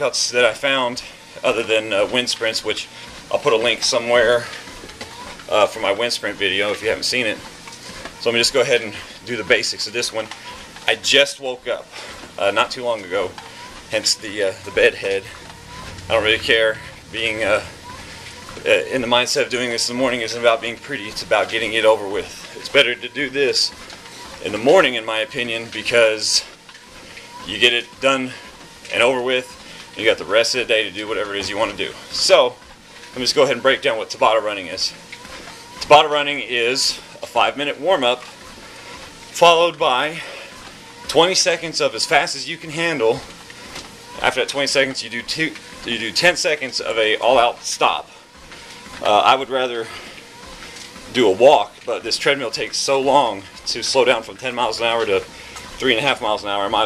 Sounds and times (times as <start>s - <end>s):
Speech: 0.0s - 4.6s, 5.5s - 7.5s, 8.2s - 10.3s, 10.9s - 15.4s, 16.1s - 17.8s, 18.6s - 23.8s, 24.4s - 26.6s, 27.4s - 32.6s, 33.2s - 35.0s, 35.8s - 38.2s, 39.4s - 40.4s, 41.1s - 43.3s, 44.2s - 48.2s, 49.0s - 50.0s, 51.1s - 56.8s.